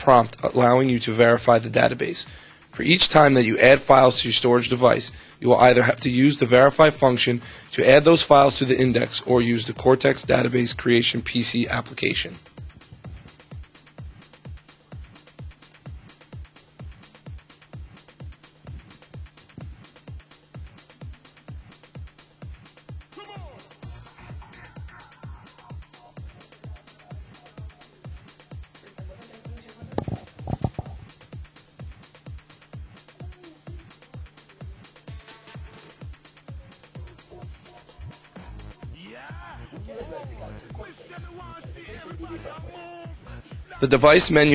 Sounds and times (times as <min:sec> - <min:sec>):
Pop music: 0:02.8 - 0:44.5.